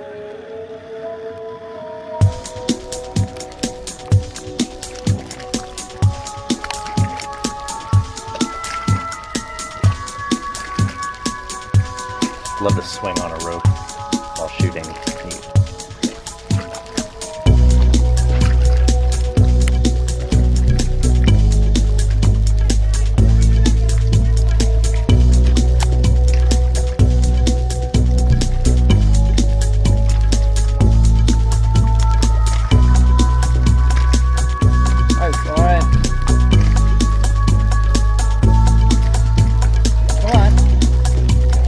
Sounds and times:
Music: 0.0s - 41.6s.

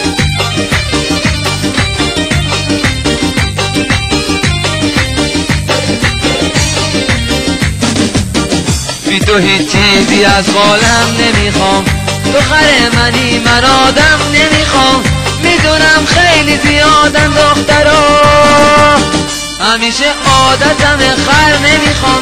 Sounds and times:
Music: 0.0s - 22.2s.

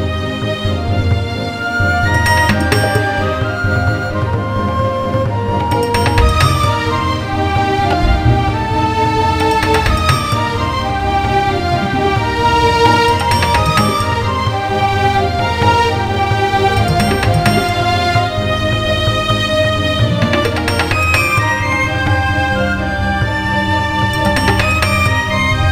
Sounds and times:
New-age music: 1.6s - 25.7s.

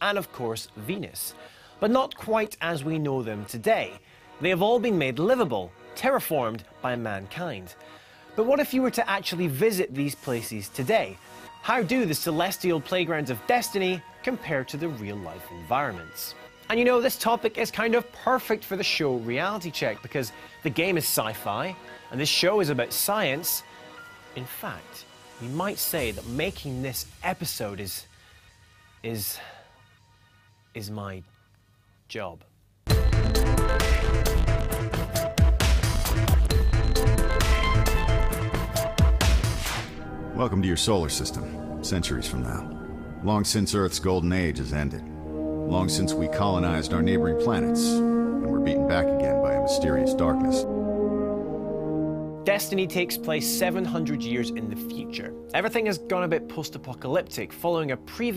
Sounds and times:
Speech: 0.0s - 7.8s, 8.4s - 23.6s, 24.4s - 28.1s, 29.0s - 29.6s, 30.8s - 31.3s, 32.1s - 32.5s, 40.4s - 45.0s, 45.7s - 50.7s, 52.5s - 58.3s
French horn: 36.8s - 58.1s.

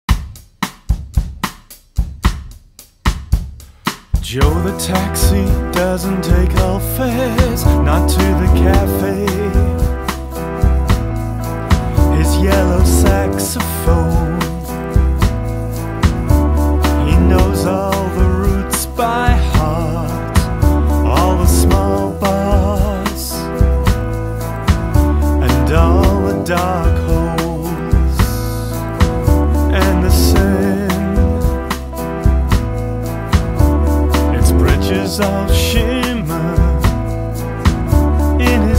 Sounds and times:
Drum kit: 0.0s - 38.7s
Bass drum: 0.1s - 38.7s.

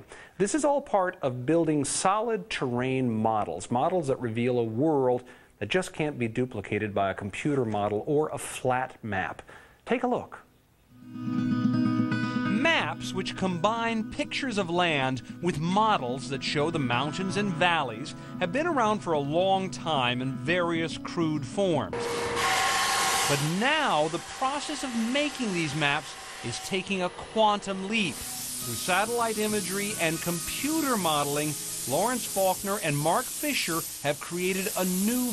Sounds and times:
Speech: 0.0s - 10.5s, 12.6s - 22.0s, 23.3s - 35.3s.

